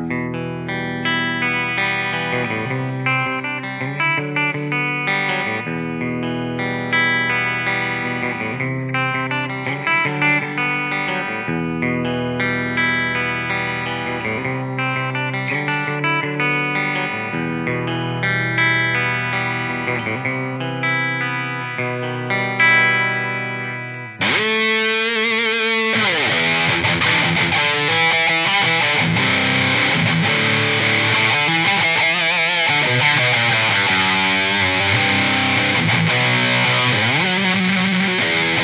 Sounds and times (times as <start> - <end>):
Chorus effect: 0.0 - 38.6
Electric guitar: 0.0 - 38.6.